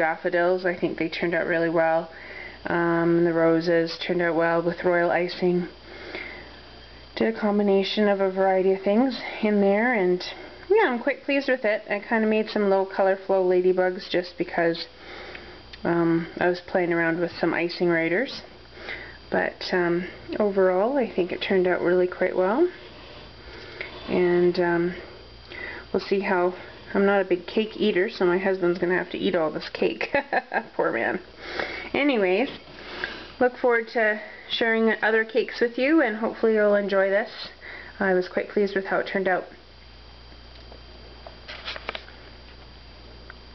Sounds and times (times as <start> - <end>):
Speech: 0.0 - 5.8, 7.2 - 14.9, 15.8 - 18.5, 19.3 - 22.8, 24.1 - 25.0, 25.9 - 31.2, 31.9 - 32.6, 33.4 - 39.6
Inside, small room: 0.0 - 43.5.